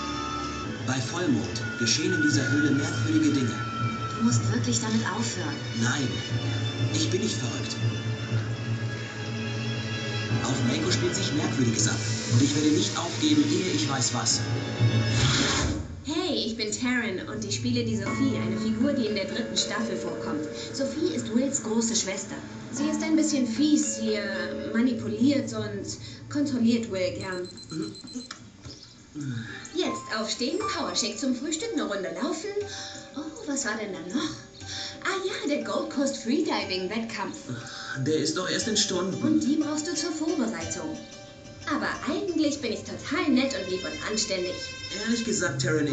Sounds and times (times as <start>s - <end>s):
Music: 0.0s - 27.5s, 29.0s - 45.9s
Speech: 10.4s - 14.5s, 16.1s - 28.0s, 29.2s - 32.6s, 33.2s - 34.4s, 35.0s - 41.0s, 41.7s - 45.9s.